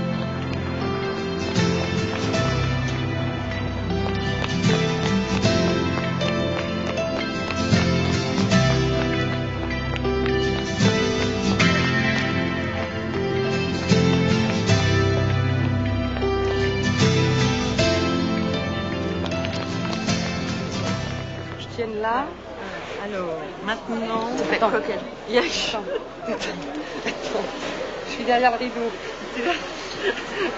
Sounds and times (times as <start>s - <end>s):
Music: 0.0s - 22.1s
Walk, footsteps: 1.4s - 17.8s, 18.5s - 21.7s.